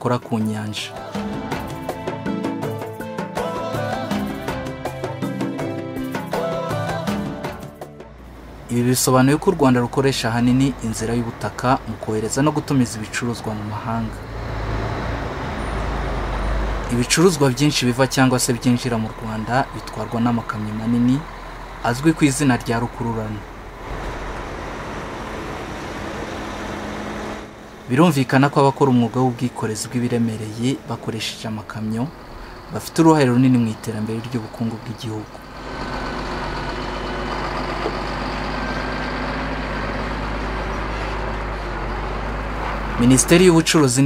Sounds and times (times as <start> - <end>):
Speech: 0.0 - 1.0, 8.7 - 14.2, 16.9 - 23.5, 27.9 - 32.2, 32.8 - 35.3, 43.0 - 44.0
Music: 0.0 - 8.7
Vehicle: 8.0 - 44.0.